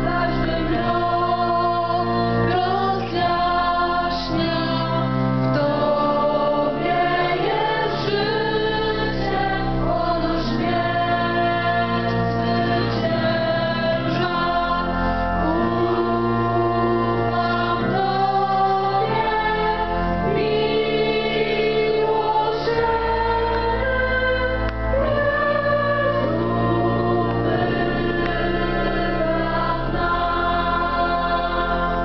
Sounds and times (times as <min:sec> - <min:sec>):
Choir: 0:00.0 - 0:32.0
Classical music: 0:00.0 - 0:32.0
Organ: 0:00.0 - 0:32.0.